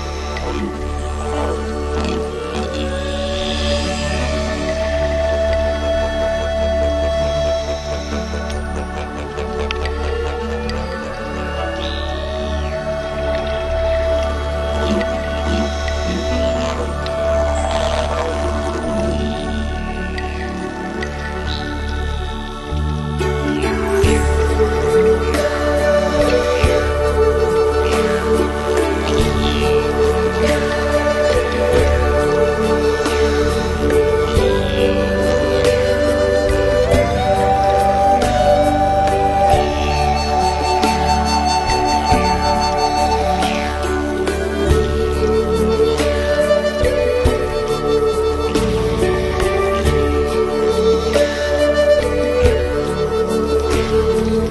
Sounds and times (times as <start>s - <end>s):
New-age music: 0.0s - 54.5s.